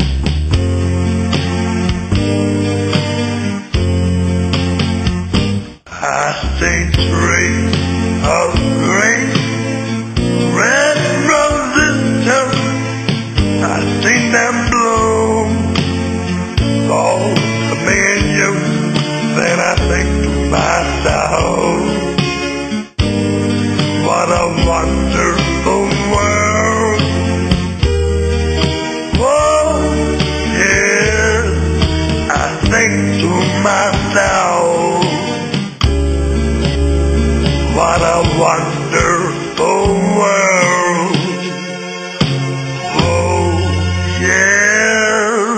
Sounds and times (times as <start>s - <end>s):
Music: 0.0s - 45.5s.